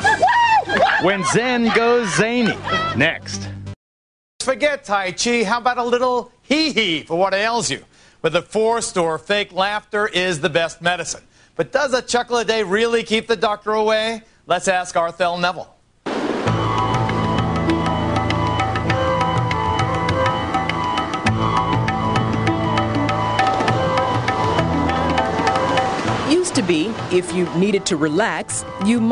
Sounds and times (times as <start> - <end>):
Music: 1.6 - 3.8, 16.4 - 29.1.